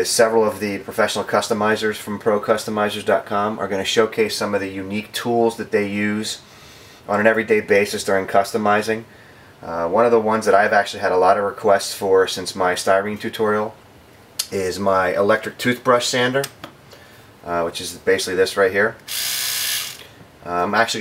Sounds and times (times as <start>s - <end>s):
Speech: 0.0s - 6.4s, 7.1s - 13.8s, 14.4s - 16.6s, 17.4s - 19.0s, 20.4s - 21.0s.